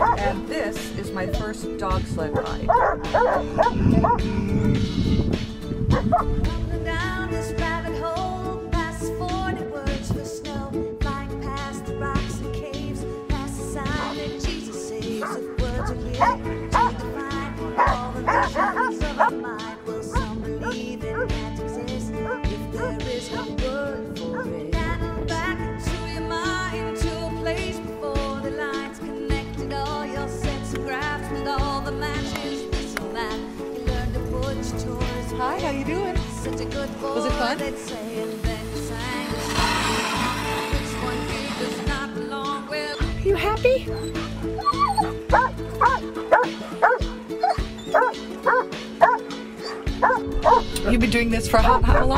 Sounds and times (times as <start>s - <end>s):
Bow-wow: 0.0s - 0.4s, 2.7s - 4.2s, 17.8s - 19.4s, 44.6s - 50.7s
Music: 0.0s - 52.1s.